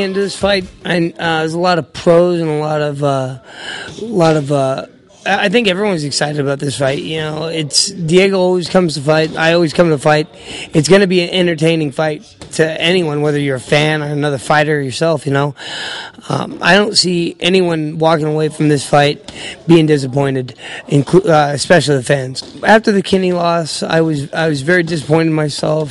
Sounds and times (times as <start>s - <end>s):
Speech: 0.0s - 25.9s.